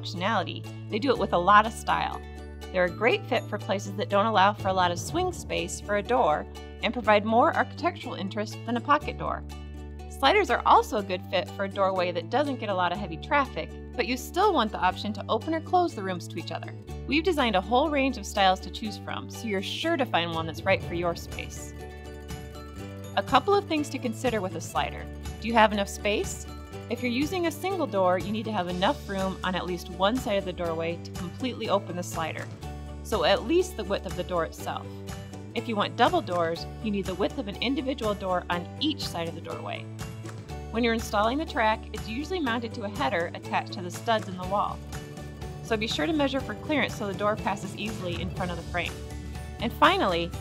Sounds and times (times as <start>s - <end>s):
Speech: 0.0s - 2.2s, 2.8s - 9.4s, 10.1s - 21.7s, 23.2s - 32.5s, 33.1s - 34.9s, 35.6s - 39.8s, 40.8s - 44.8s, 45.7s - 49.0s, 49.6s - 50.4s
Music: 0.0s - 50.4s.